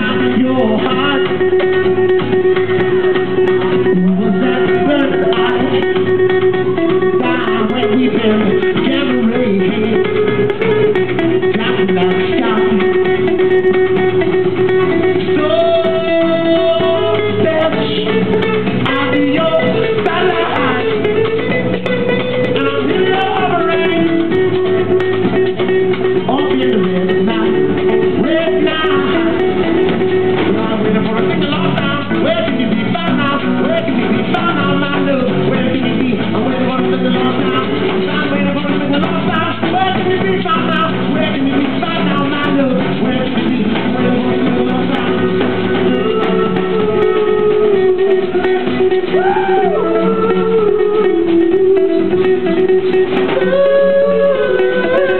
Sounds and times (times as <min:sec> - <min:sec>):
Music: 0:00.0 - 0:55.2.